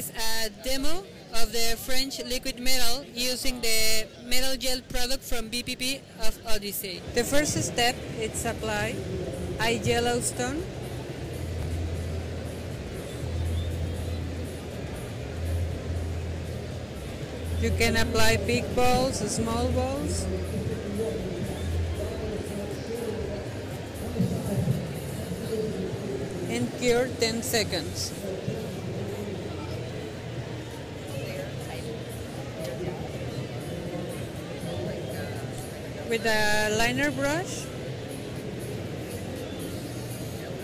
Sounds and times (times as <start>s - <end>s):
Speech: 9.6s - 10.7s, 17.6s - 29.9s, 36.1s - 37.7s.